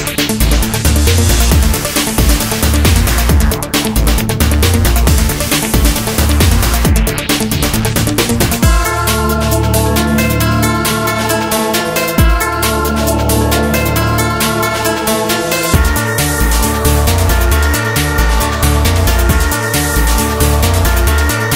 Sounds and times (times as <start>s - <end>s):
Trance music: 0.0s - 21.5s.